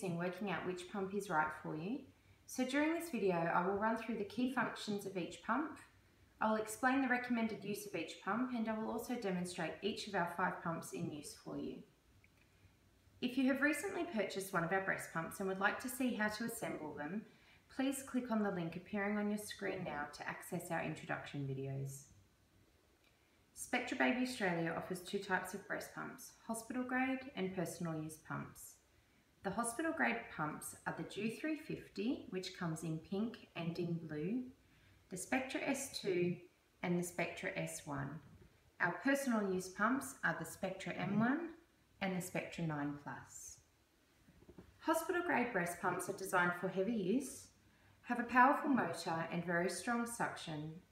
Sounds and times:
Speech: 0.0 - 11.9, 13.2 - 22.2, 23.6 - 28.8, 29.5 - 43.7, 44.8 - 50.9.

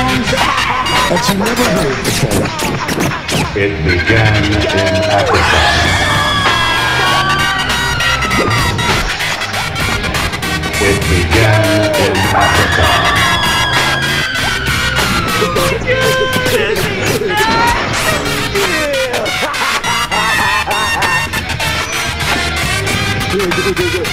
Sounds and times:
Music: 0.0 - 24.1.

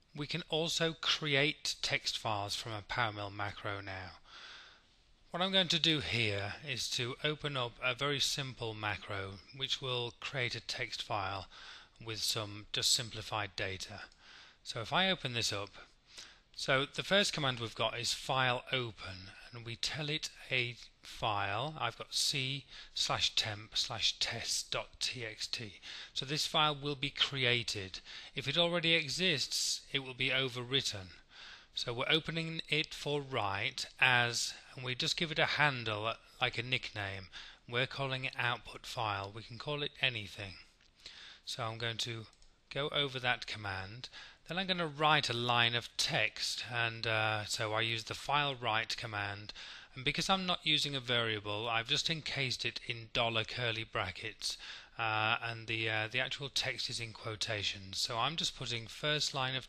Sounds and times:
Speech: 0.1 - 4.2, 5.3 - 15.9, 16.6 - 40.7, 41.5 - 59.6.

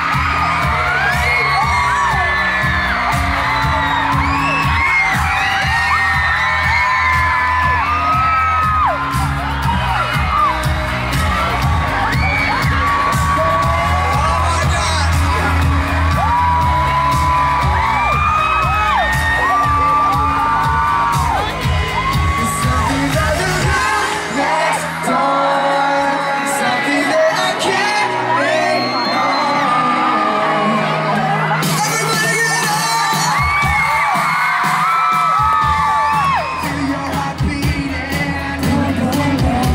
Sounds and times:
Music: 0.0 - 39.7
Speech: 14.2 - 15.2, 31.6 - 33.3.

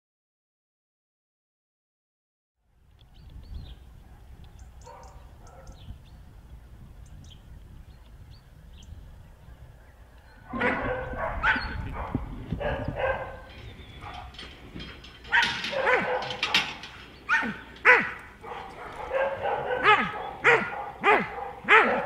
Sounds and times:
Bow-wow: 10.5 - 14.3, 15.3 - 22.0.

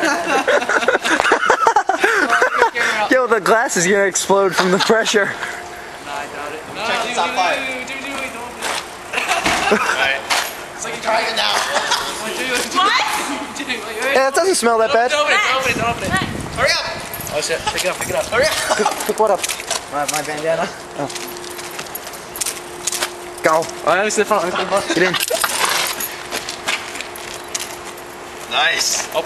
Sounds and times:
Vehicle: 0.0 - 29.2.

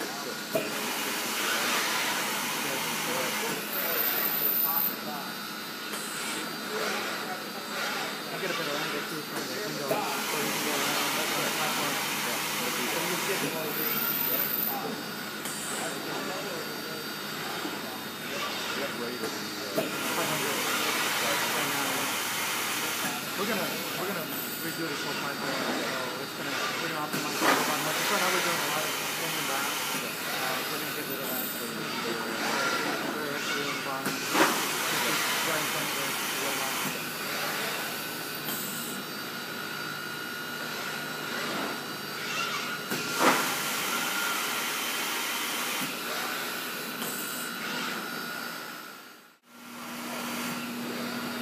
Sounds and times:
Speech: 0.0 - 0.6, 2.5 - 5.4, 6.4 - 38.0.

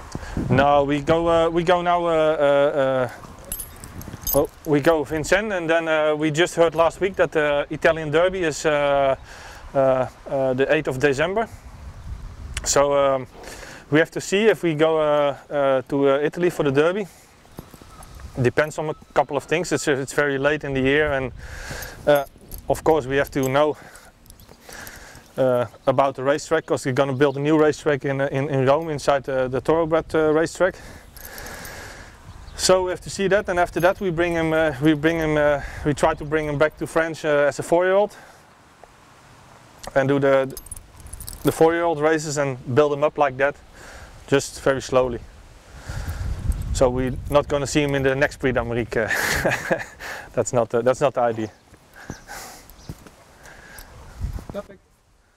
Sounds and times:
Speech: 0.5 - 3.2, 4.4 - 9.2, 9.8 - 11.5, 12.6 - 13.3, 13.9 - 17.1, 18.4 - 21.4, 22.1 - 23.8, 25.4 - 30.8, 32.6 - 38.2, 39.9 - 40.6, 41.4 - 43.6, 44.3 - 45.2, 46.8 - 49.2, 50.4 - 51.6, 54.5 - 54.8.

